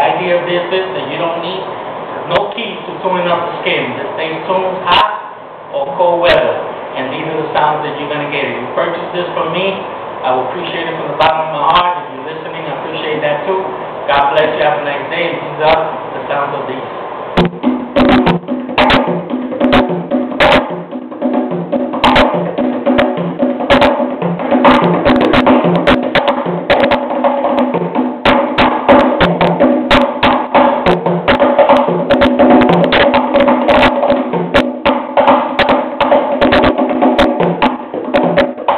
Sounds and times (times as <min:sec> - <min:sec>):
Wood block: 0:17.4 - 0:20.8, 0:22.0 - 0:38.7.